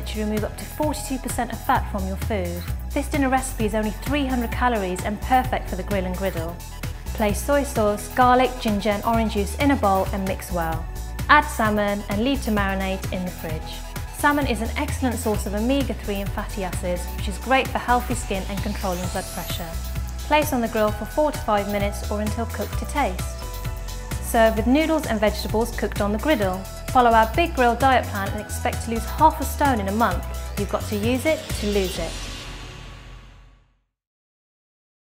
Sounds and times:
Speech: 0.0 - 6.6, 7.2 - 23.3, 24.2 - 32.2
Music: 0.0 - 34.0.

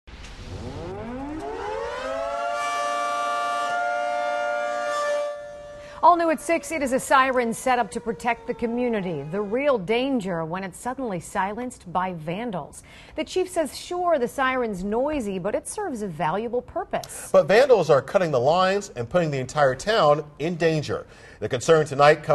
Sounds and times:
Civil defense siren: 0.3 - 10.6.

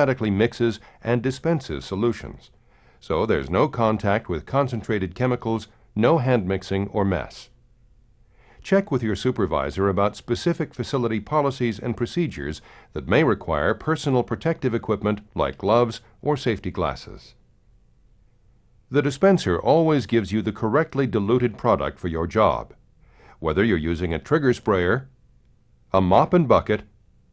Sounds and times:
Speech: 0.0 - 7.6, 8.6 - 17.4, 18.9 - 22.8, 23.4 - 25.2, 25.9 - 27.0.

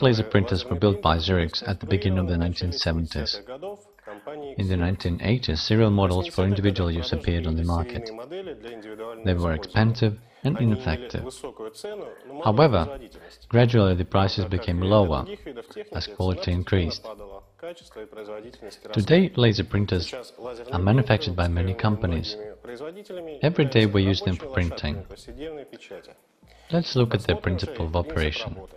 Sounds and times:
Speech: 0.0 - 28.7.

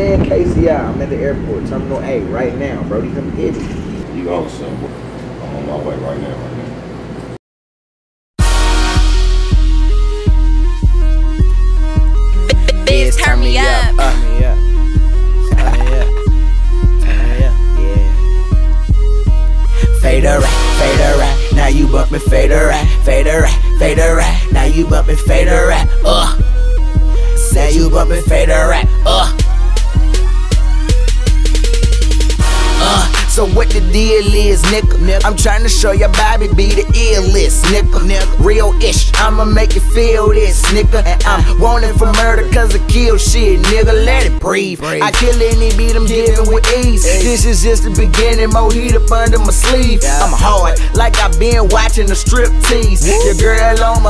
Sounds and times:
Speech: 0.0 - 6.8, 12.5 - 14.6, 15.6 - 16.1
Theme music: 8.4 - 38.7, 41.0 - 54.1.

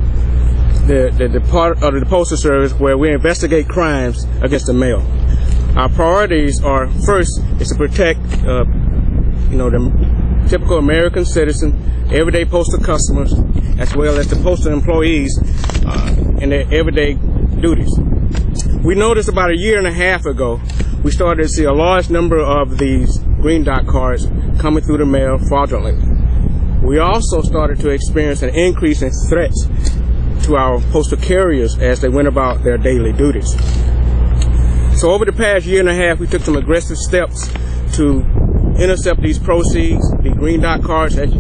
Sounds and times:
Speech: 0.8 - 5.1, 5.7 - 8.8, 9.5 - 18.0, 18.8 - 26.0, 26.8 - 29.8, 30.4 - 33.7, 35.0 - 41.4.

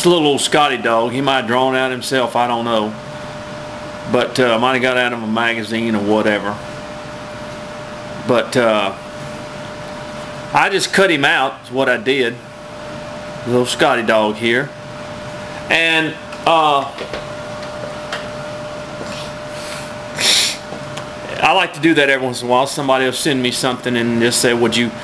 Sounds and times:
Speech: 0.0 - 3.0, 4.1 - 6.6, 8.2 - 9.0, 10.5 - 12.4, 13.4 - 14.8, 15.7 - 17.0, 21.2 - 25.0.

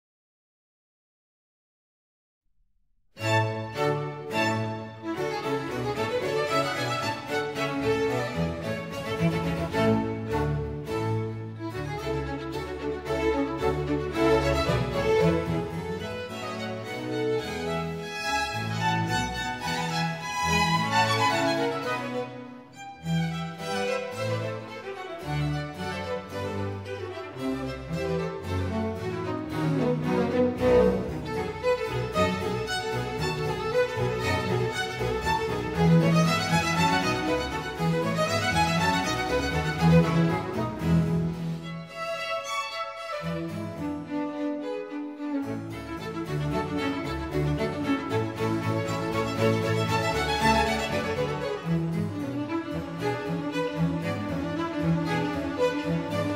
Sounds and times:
Violin, fiddle: 3.2 - 56.3.

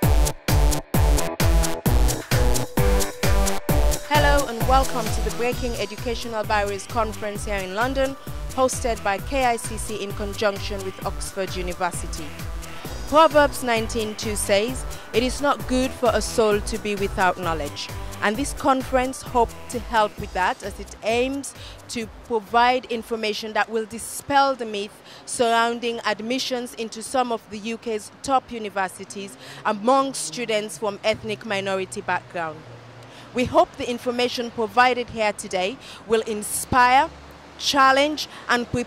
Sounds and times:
Speech: 4.1 - 12.3, 13.1 - 32.6, 33.4 - 38.8.

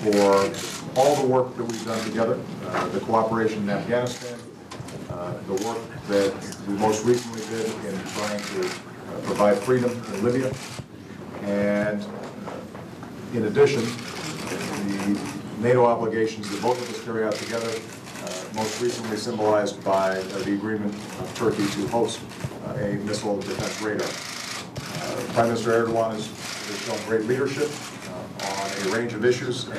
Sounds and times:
Speech: 0.0 - 4.5, 5.1 - 10.6, 11.4 - 12.2, 13.3 - 14.0, 14.8 - 24.2, 25.0 - 29.7.

